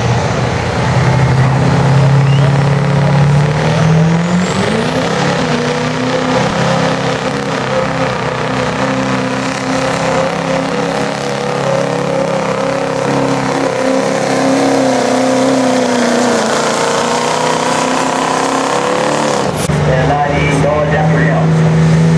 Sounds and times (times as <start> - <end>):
Truck: 0.0 - 22.1.